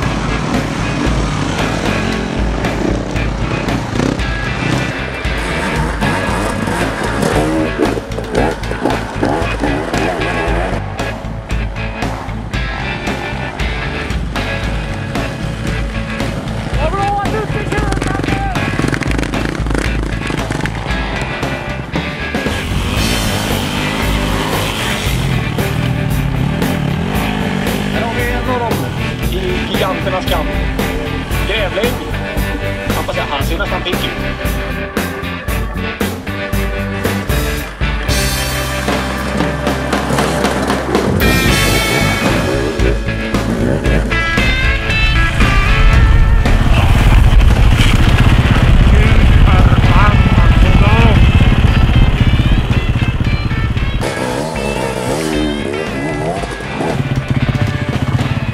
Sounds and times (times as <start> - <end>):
Music: 0.0 - 58.5.